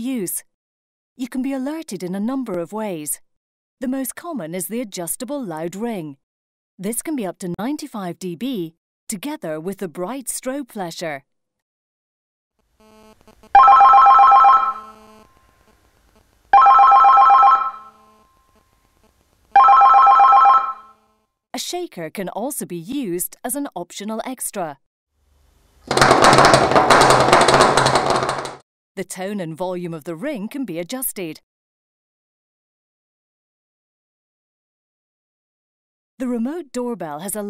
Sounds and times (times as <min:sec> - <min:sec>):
Speech: 0:00.0 - 0:00.5, 0:01.2 - 0:03.2, 0:03.8 - 0:06.2, 0:06.8 - 0:11.3, 0:21.6 - 0:24.8, 0:29.0 - 0:31.4, 0:36.2 - 0:37.5.